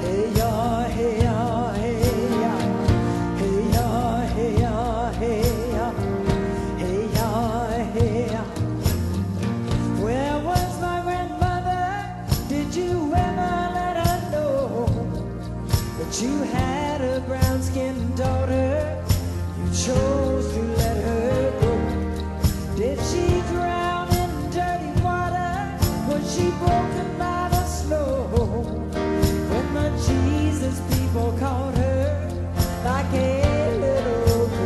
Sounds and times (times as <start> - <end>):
Music: 0.0 - 34.6.